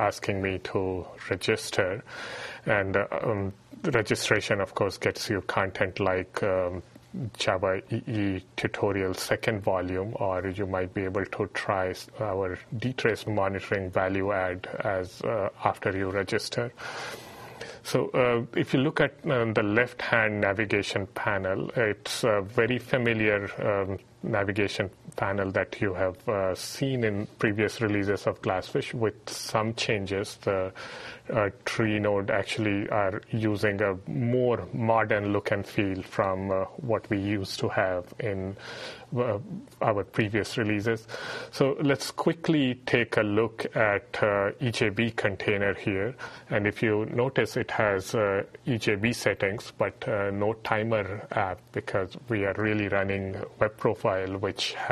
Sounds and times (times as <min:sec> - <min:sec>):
Speech: 0:00.0 - 0:16.8, 0:17.8 - 0:54.9.